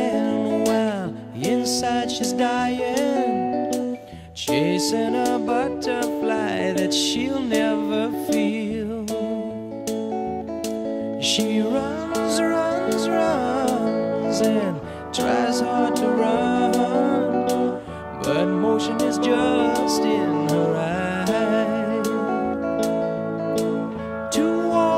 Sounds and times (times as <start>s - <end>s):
Music: 0.0s - 24.9s.